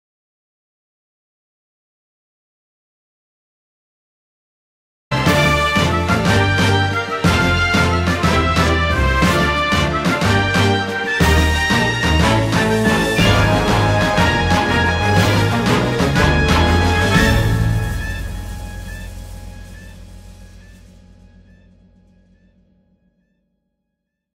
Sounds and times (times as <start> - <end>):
Theme music: 5.1 - 22.5.